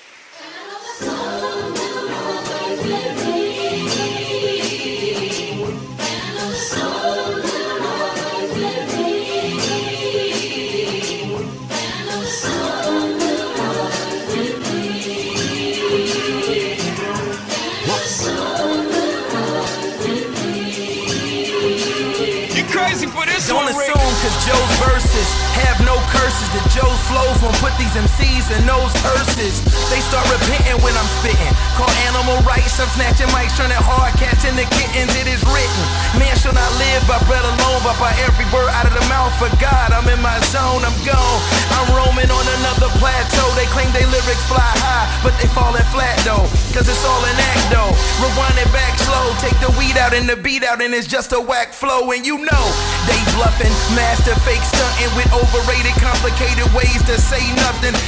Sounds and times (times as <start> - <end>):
Blues: 8.9 - 50.4, 52.6 - 58.0.